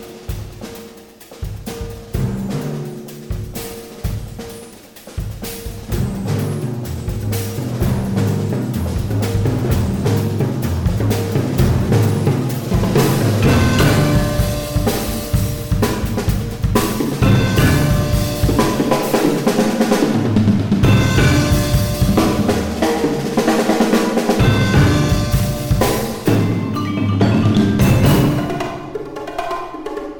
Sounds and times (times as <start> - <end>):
Drum: 0.0 - 30.1
Drum kit: 0.0 - 30.1.